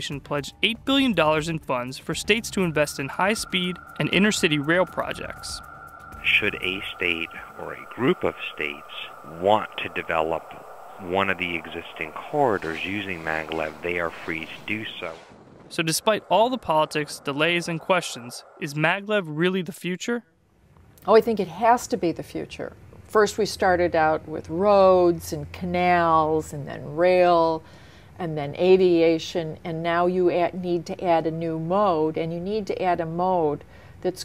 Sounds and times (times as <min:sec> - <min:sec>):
Speech: 0:00.0 - 0:05.6, 0:06.2 - 0:20.2
Outside, rural or natural: 0:00.0 - 0:20.0.